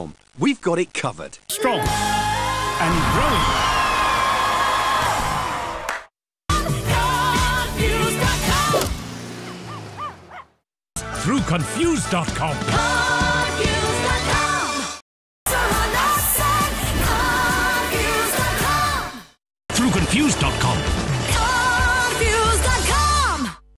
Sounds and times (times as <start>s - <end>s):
Speech: 0.0s - 1.9s, 2.8s - 3.6s, 11.2s - 12.8s, 19.7s - 20.9s
Music: 1.8s - 4.7s, 6.5s - 8.9s, 11.0s - 23.7s.